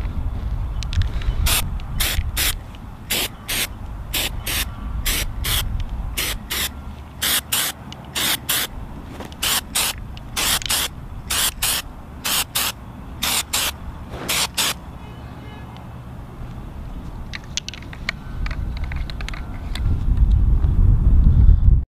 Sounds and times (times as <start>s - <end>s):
Spray: 1.5s - 5.6s, 6.2s - 8.7s, 9.4s - 14.8s.